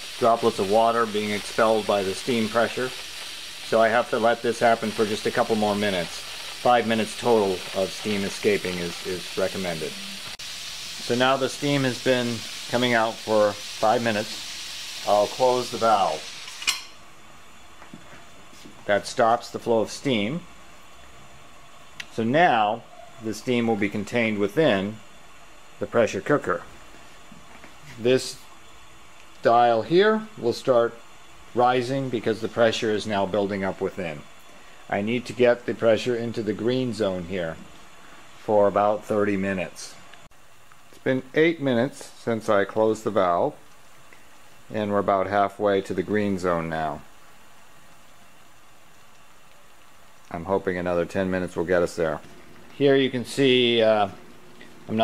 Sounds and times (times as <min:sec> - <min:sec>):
Speech: 0:00.2 - 0:03.0, 0:03.7 - 0:10.0, 0:11.0 - 0:14.4, 0:15.0 - 0:16.3, 0:18.8 - 0:20.5, 0:22.1 - 0:25.0, 0:25.8 - 0:26.7, 0:27.9 - 0:28.5, 0:29.4 - 0:31.0, 0:31.6 - 0:34.3, 0:34.9 - 0:37.7, 0:38.4 - 0:40.0, 0:41.0 - 0:43.6, 0:44.7 - 0:47.1, 0:50.3 - 0:54.2.